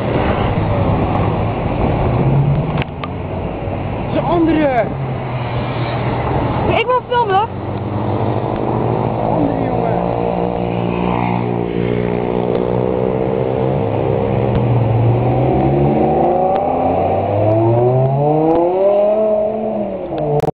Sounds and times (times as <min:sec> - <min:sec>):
Car: 0:00.0 - 0:20.5
Accelerating, revving, vroom: 0:07.7 - 0:20.5.